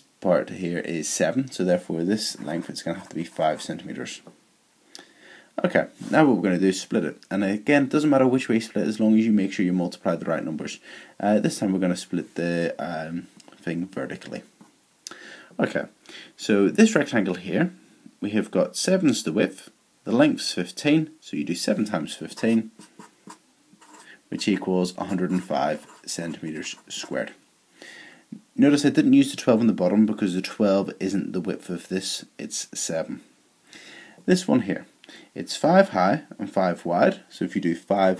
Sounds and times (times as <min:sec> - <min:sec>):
Inside, small room: 0:00.0 - 0:38.1
Speech: 0:00.2 - 0:04.3, 0:05.6 - 0:14.5, 0:15.6 - 0:22.8, 0:23.9 - 0:27.4, 0:28.6 - 0:33.3, 0:34.3 - 0:38.1
Writing: 0:02.2 - 0:03.8, 0:22.3 - 0:27.2.